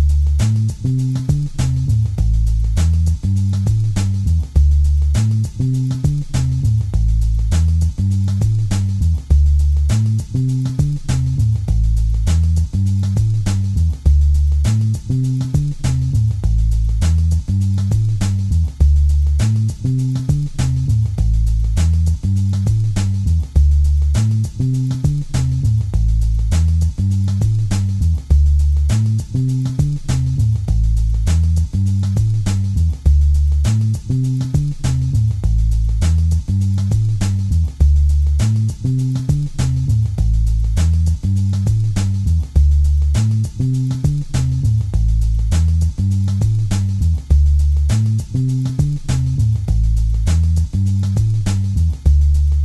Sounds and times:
Music: 0:00.0 - 0:52.6.

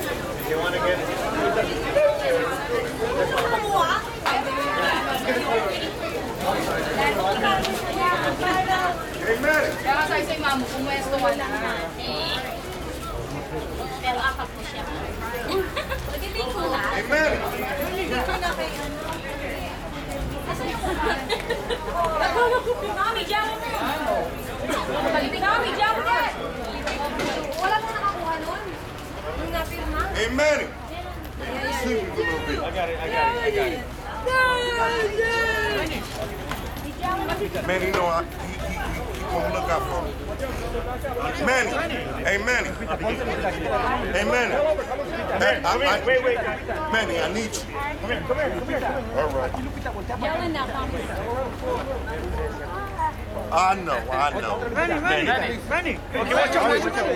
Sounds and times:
Speech: 0:00.0 - 0:57.1
Shout: 0:34.1 - 0:36.0.

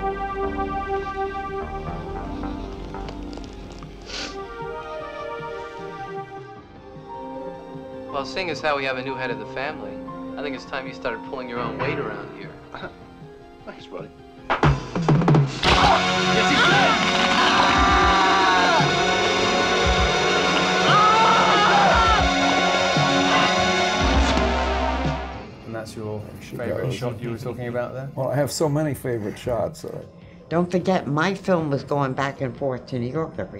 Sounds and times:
Music: 0:00.0 - 0:33.5.

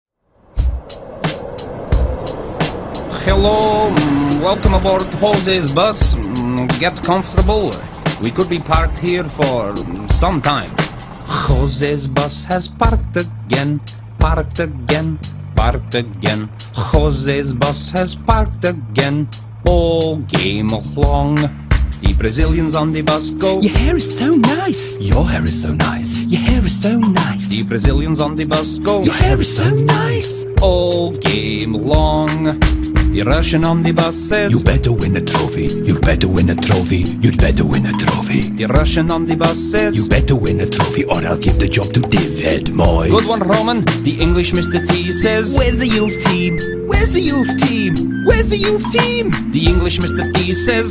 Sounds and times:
Music: 0:00.2 - 0:50.9
Vehicle: 0:00.3 - 0:50.9.

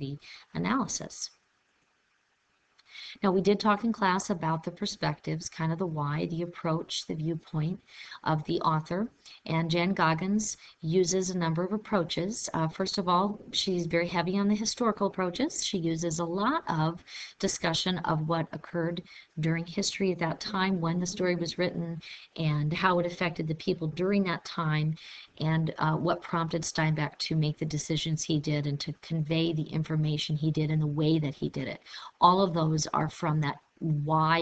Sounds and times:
Speech: 0:00.0 - 0:01.3, 0:03.0 - 0:34.4.

